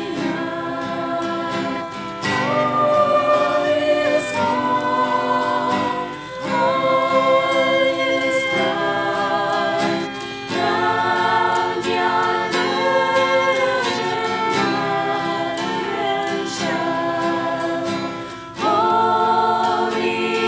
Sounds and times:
Male singing: 0.0 - 17.9
Choir: 0.0 - 20.4
Female singing: 0.0 - 20.4.

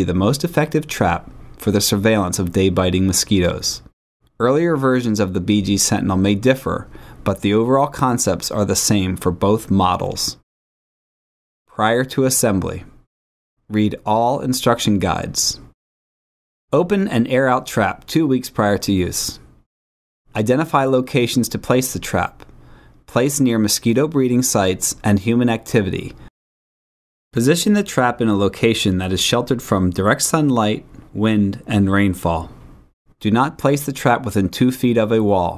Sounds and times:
Speech: 0.0 - 10.4, 11.7 - 13.0, 13.7 - 15.8, 16.7 - 19.4, 20.3 - 22.4, 23.1 - 26.2, 27.4 - 32.6, 33.2 - 35.5.

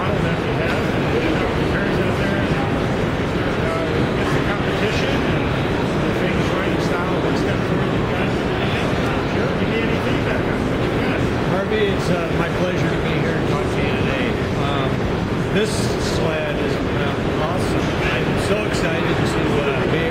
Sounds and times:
Speech: 0.0 - 20.1.

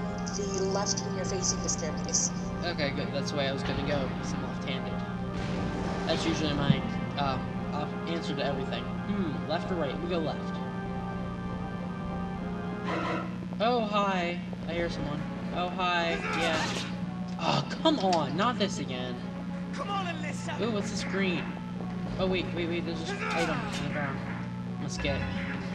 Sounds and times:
Music: 0.0 - 25.7
Speech: 0.3 - 5.0, 6.1 - 10.5, 13.6 - 16.8, 17.4 - 19.2, 19.8 - 21.5, 22.2 - 24.2, 24.8 - 25.4.

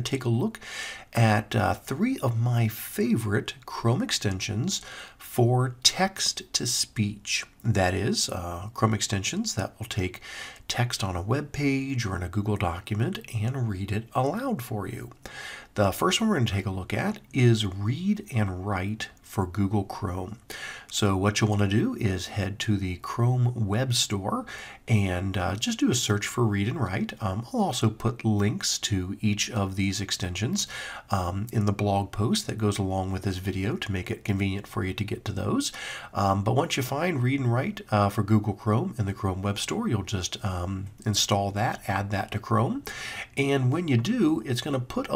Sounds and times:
Narration, monologue: 0.0 - 45.1.

